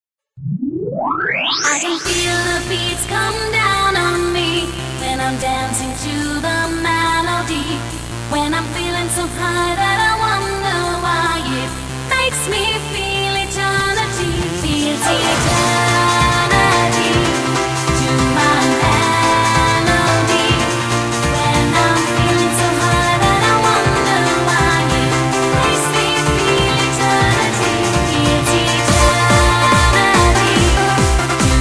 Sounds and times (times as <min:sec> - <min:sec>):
Techno: 0:01.6 - 0:31.6.